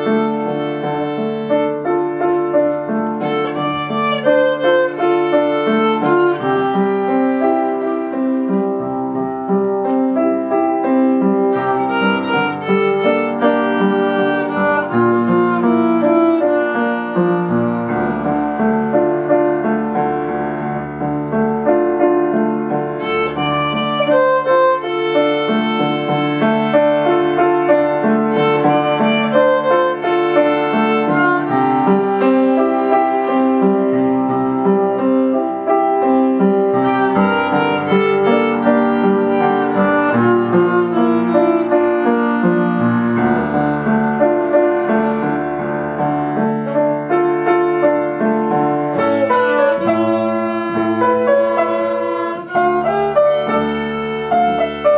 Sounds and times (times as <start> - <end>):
Violin, fiddle: 0.0 - 9.2, 10.5 - 19.4, 22.8 - 34.6, 36.6 - 47.5, 48.9 - 54.9.